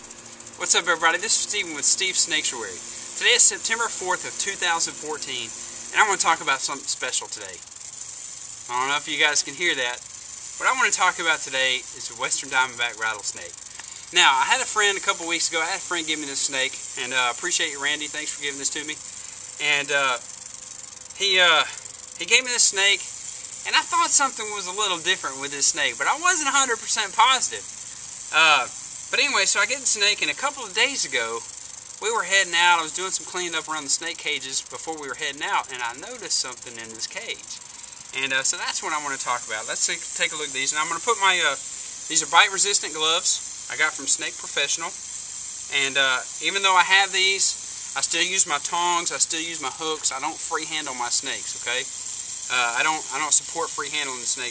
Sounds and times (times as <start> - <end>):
Snake: 0.0 - 54.5.